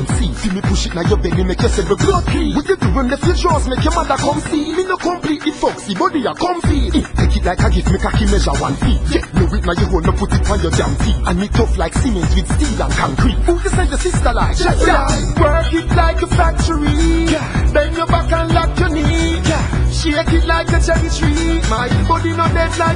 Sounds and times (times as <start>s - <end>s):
Music: 0.0s - 22.9s.